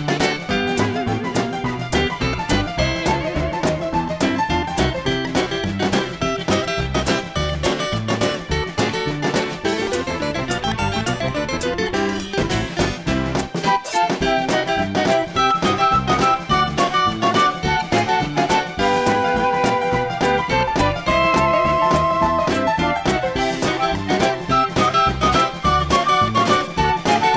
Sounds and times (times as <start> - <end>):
Flute: 13.6 - 27.3.